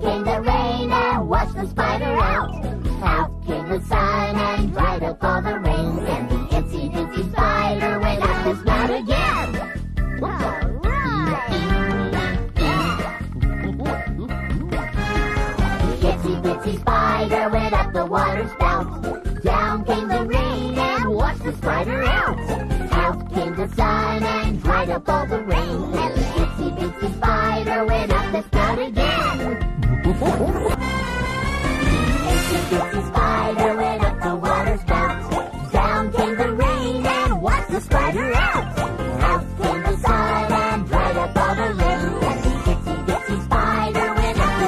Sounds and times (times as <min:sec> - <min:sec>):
Funny music: 0:00.0 - 0:44.6
Dance music: 0:10.4 - 0:17.5, 0:27.7 - 0:44.6.